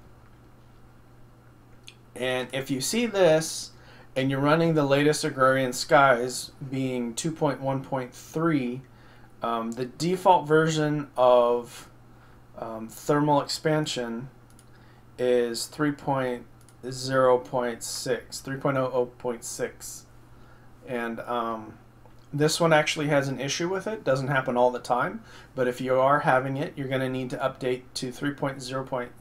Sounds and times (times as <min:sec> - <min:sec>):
Speech: 0:02.2 - 0:08.8, 0:09.4 - 0:11.9, 0:12.6 - 0:14.3, 0:15.2 - 0:20.1, 0:20.8 - 0:29.2.